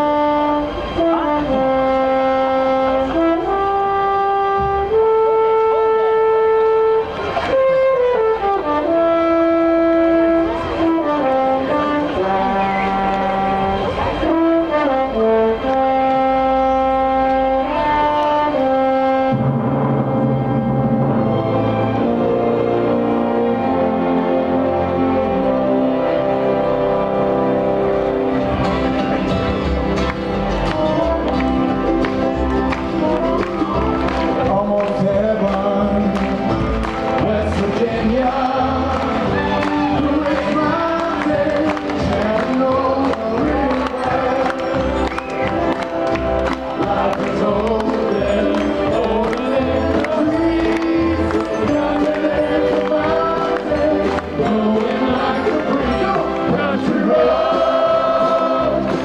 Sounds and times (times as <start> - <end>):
Inside, large room or hall: 0.0 - 59.0
Music: 0.0 - 59.0.